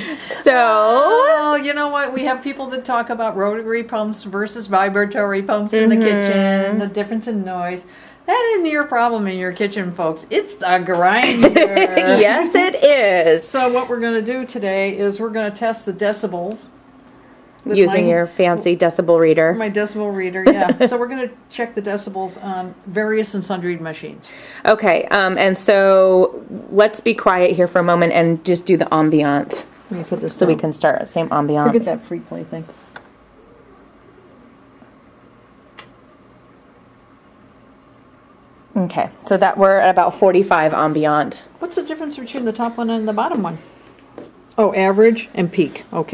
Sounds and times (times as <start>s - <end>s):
Speech: 0.4s - 16.7s, 17.6s - 32.7s.